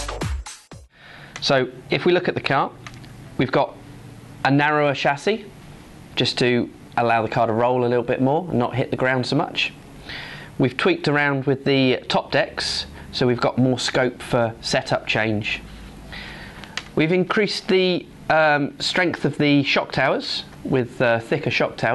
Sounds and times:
Speech: 1.4s - 2.8s, 3.4s - 3.8s, 4.4s - 5.5s, 6.2s - 9.8s, 10.6s - 15.7s, 17.0s - 21.9s.

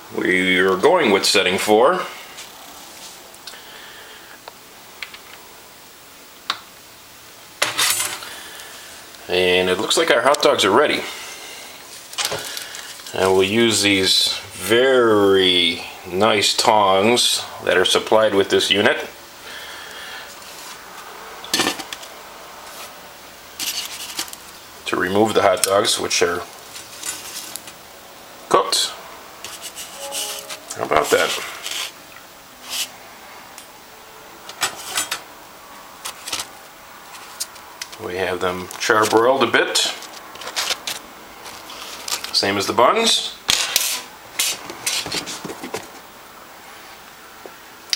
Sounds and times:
Speech: 0.1s - 2.2s, 9.2s - 11.2s, 13.1s - 19.2s, 24.8s - 26.5s, 28.5s - 29.0s, 30.7s - 31.6s, 38.0s - 40.0s, 42.3s - 43.4s.

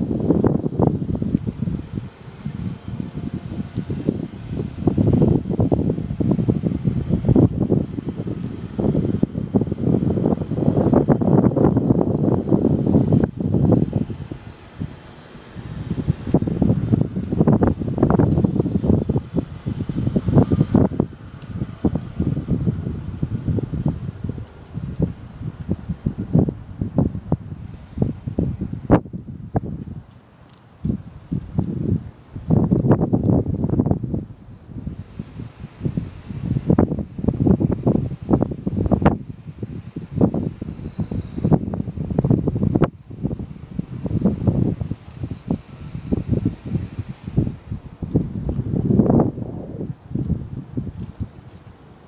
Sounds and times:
Wind noise (microphone): 0.0s - 52.0s.

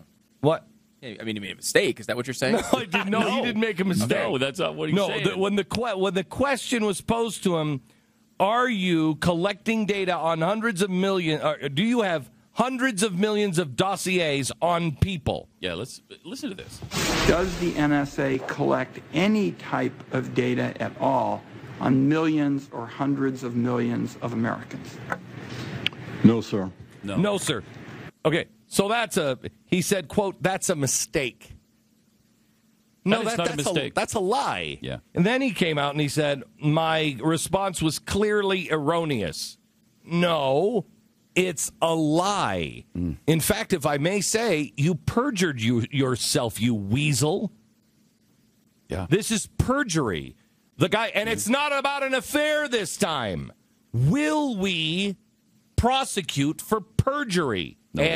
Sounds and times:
Speech: 0.0s - 7.8s, 8.4s - 25.0s, 26.2s - 27.6s, 28.2s - 31.6s, 33.0s - 47.6s, 48.9s - 55.2s, 55.8s - 58.1s.

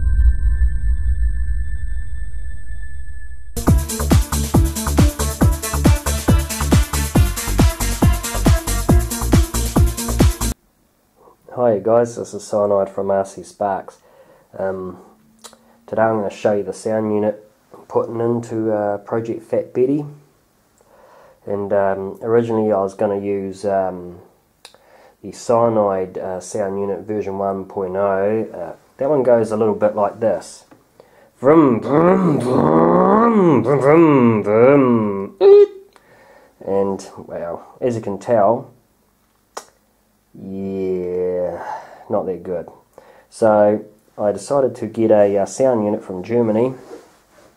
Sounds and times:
Speech: 11.2s - 14.0s, 14.6s - 15.2s, 15.9s - 20.3s, 21.4s - 24.3s, 25.2s - 30.7s, 31.4s - 35.8s, 36.6s - 38.8s, 40.4s - 47.0s.

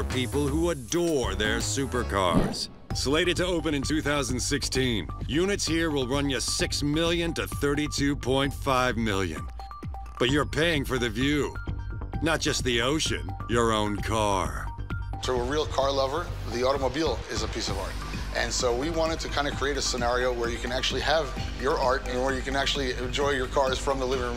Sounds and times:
Speech: 0.0s - 9.5s, 10.2s - 11.6s, 12.2s - 24.3s
Music: 0.0s - 24.3s.

